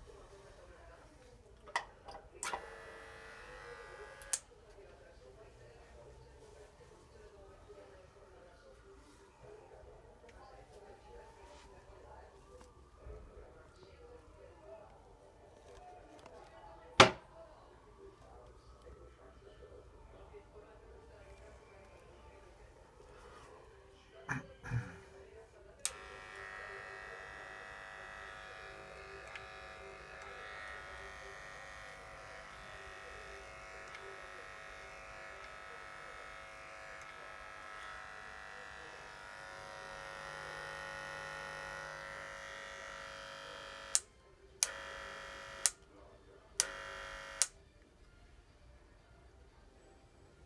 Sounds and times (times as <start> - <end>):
Speech: 0.0 - 48.0
Electric shaver, electric razor: 2.5 - 4.4, 25.9 - 45.8, 46.6 - 47.6.